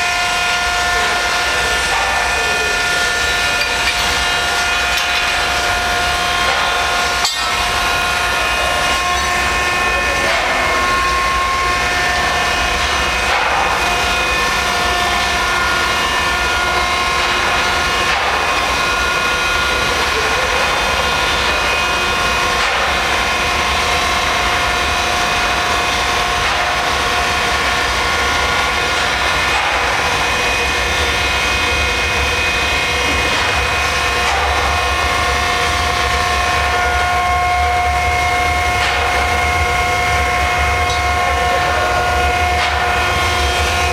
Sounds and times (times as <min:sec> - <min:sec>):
Speech: 0:00.8 - 0:03.9, 0:08.3 - 0:09.1, 0:09.7 - 0:11.1, 0:19.8 - 0:22.2, 0:40.8 - 0:42.8.